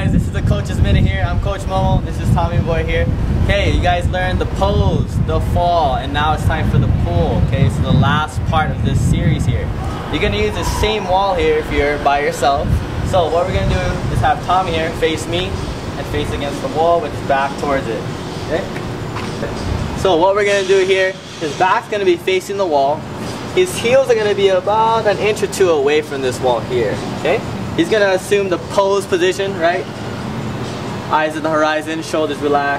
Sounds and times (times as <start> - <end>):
Male speech, man speaking: 0.0 - 18.8, 19.4 - 23.0, 23.6 - 29.9, 31.1 - 32.7.